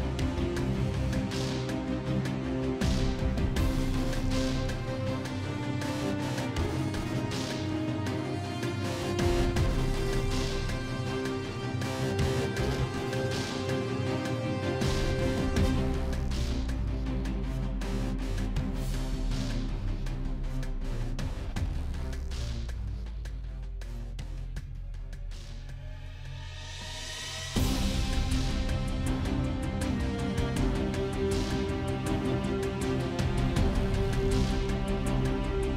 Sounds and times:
Soundtrack music: 0:00.0 - 0:35.7.

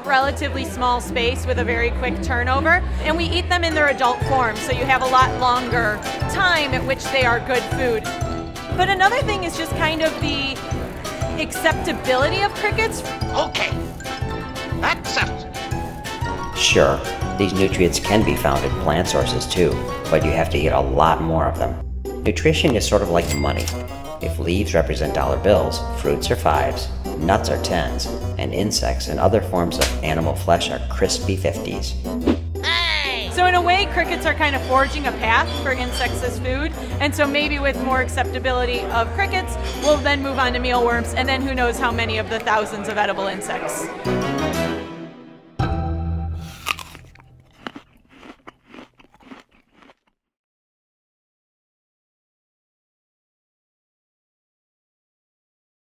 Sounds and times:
Music: 0:00.0 - 0:47.1.

